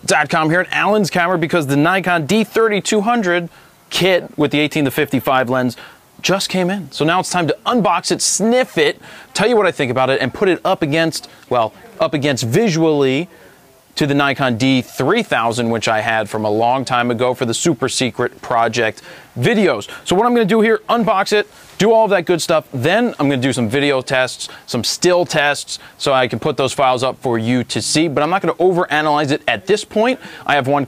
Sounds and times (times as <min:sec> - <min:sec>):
Speech: 0:00.0 - 0:30.8.